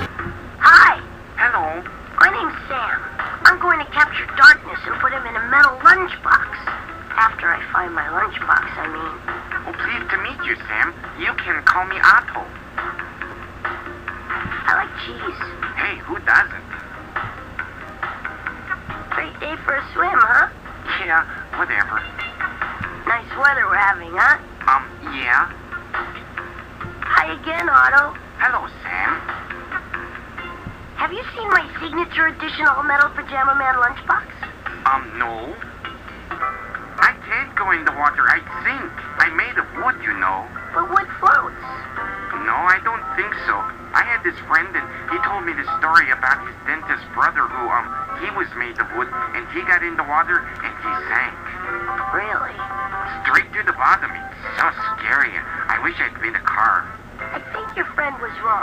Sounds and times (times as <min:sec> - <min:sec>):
Music: 0:00.0 - 0:58.6
Speech: 0:00.6 - 0:12.5, 0:14.6 - 0:16.6, 0:27.1 - 0:29.2, 0:31.0 - 0:35.6, 0:37.0 - 0:41.6, 0:42.4 - 0:51.4, 0:53.1 - 0:58.6.